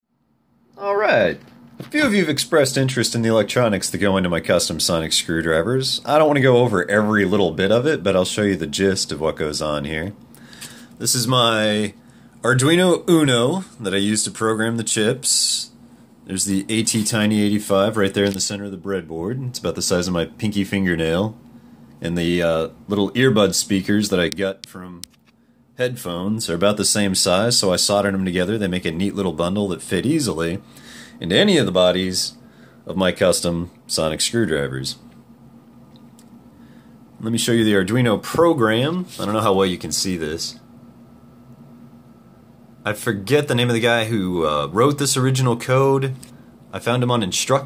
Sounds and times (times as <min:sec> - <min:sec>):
Speech: 0:00.8 - 0:10.2, 0:11.0 - 0:21.4, 0:22.0 - 0:25.2, 0:25.8 - 0:35.1, 0:37.2 - 0:40.7, 0:42.8 - 0:47.6.